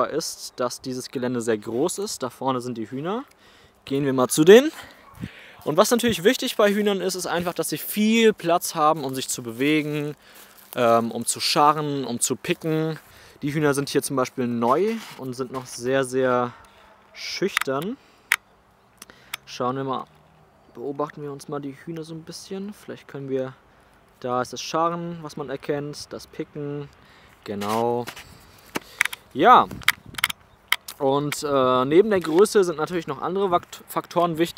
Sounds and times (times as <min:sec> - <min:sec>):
Speech: 0:00.0 - 0:03.3, 0:03.9 - 0:04.9, 0:05.6 - 0:16.6, 0:17.2 - 0:18.0, 0:19.5 - 0:20.1, 0:20.7 - 0:23.6, 0:24.2 - 0:28.1, 0:29.4 - 0:29.7, 0:31.0 - 0:34.5.